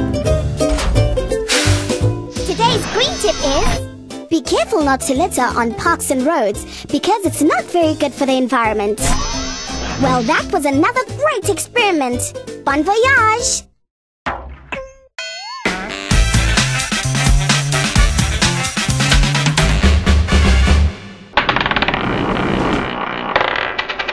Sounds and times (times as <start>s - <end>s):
Music: 0.0s - 13.7s, 14.4s - 21.3s
Speech: 2.4s - 9.0s, 10.0s - 13.7s.